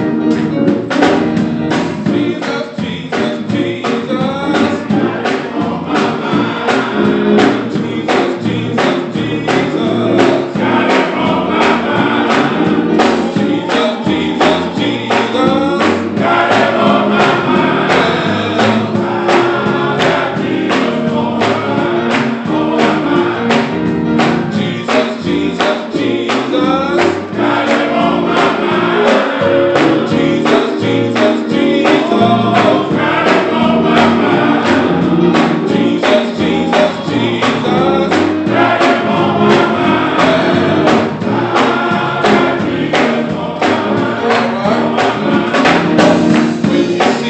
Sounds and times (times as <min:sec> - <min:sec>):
Choir: 0:01.0 - 0:47.2
Male singing: 0:02.1 - 0:06.9, 0:07.7 - 0:23.6, 0:24.6 - 0:29.2, 0:30.0 - 0:34.8, 0:35.7 - 0:40.7, 0:41.5 - 0:47.2.